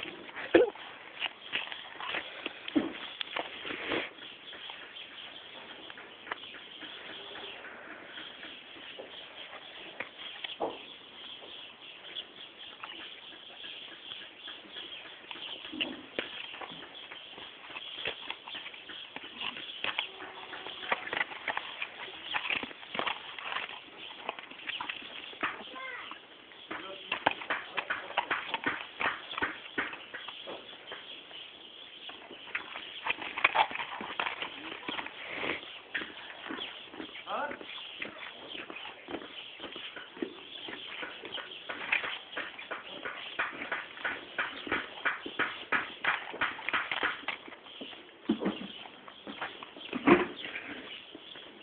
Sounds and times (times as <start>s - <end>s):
Clip-clop: 0.0s - 51.6s
Speech: 25.6s - 26.1s, 26.8s - 27.9s, 37.2s - 37.7s.